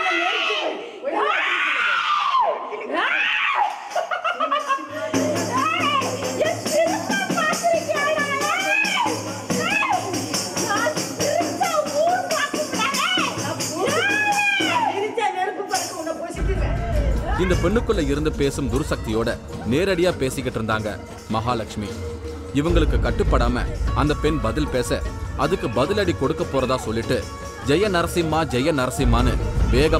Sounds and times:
Laughter: 3.6 - 5.4
Music: 4.4 - 29.9.

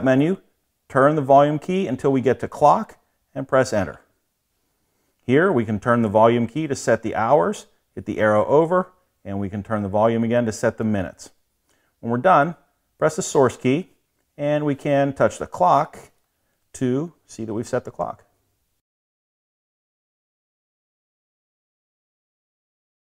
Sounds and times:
Speech: 0.0 - 4.1, 5.2 - 11.4, 12.0 - 18.3.

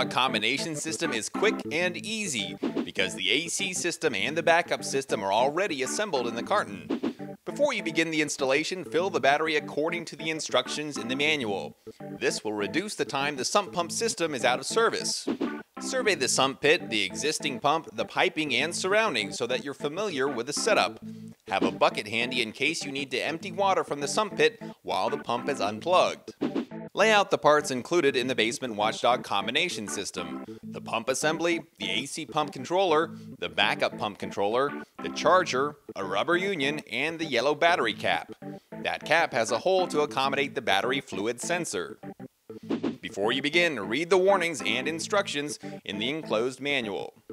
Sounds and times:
Speech: 0.0 - 6.9, 7.5 - 15.3, 15.9 - 26.4, 27.0 - 42.0, 43.0 - 47.2
Music: 0.0 - 47.3.

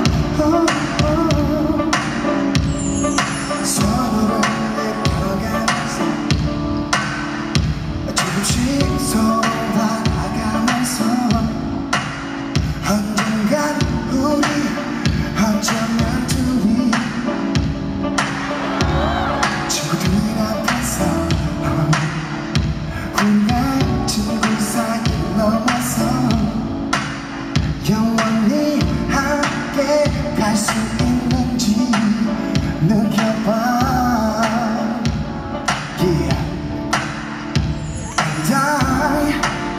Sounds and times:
Music: 0.0 - 39.7.

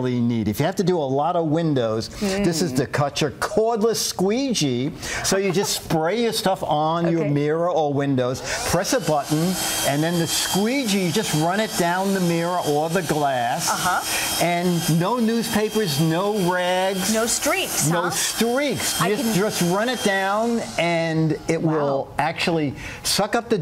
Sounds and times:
Speech: 0.0 - 23.6.

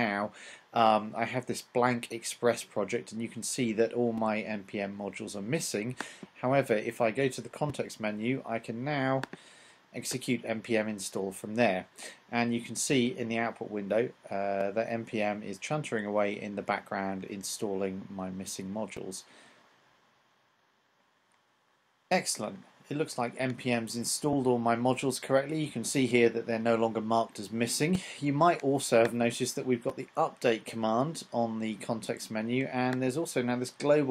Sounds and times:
Speech: 0.0 - 9.3, 10.0 - 19.3, 22.1 - 34.1.

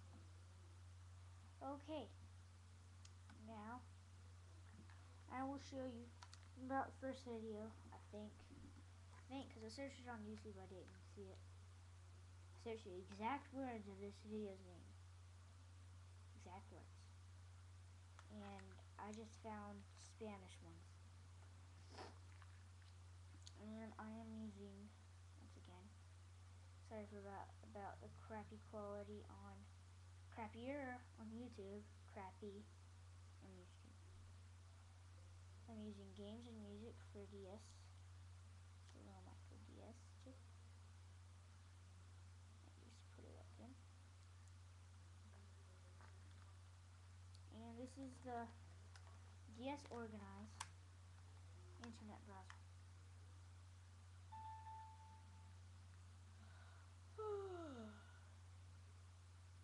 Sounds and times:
Inside, small room: 0.0 - 59.6
Speech: 1.6 - 2.2, 3.3 - 3.9, 4.7 - 11.4, 12.6 - 15.0, 16.4 - 17.1, 18.3 - 20.9, 23.5 - 26.0, 26.8 - 29.7, 30.3 - 32.7, 33.4 - 34.0, 35.6 - 38.0, 38.9 - 40.4, 42.6 - 43.8, 47.5 - 48.6, 49.5 - 50.6, 51.8 - 52.6, 57.2 - 58.2.

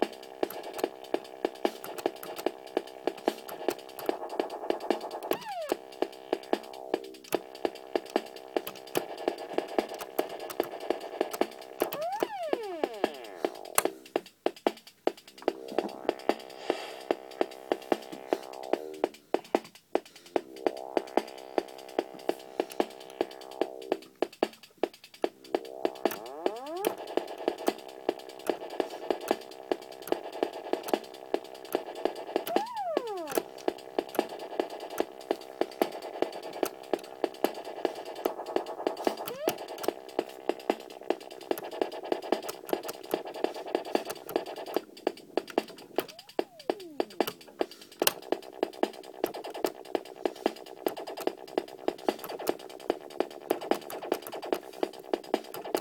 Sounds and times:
Dubstep: 0.0 - 14.2, 15.2 - 19.2, 20.2 - 55.8
Synthesizer: 0.0 - 55.8.

